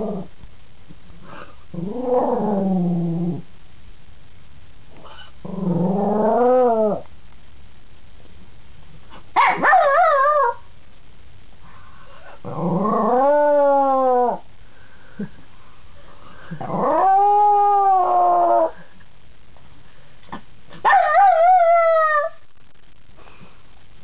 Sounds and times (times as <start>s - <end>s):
Bark: 9.4s - 10.6s.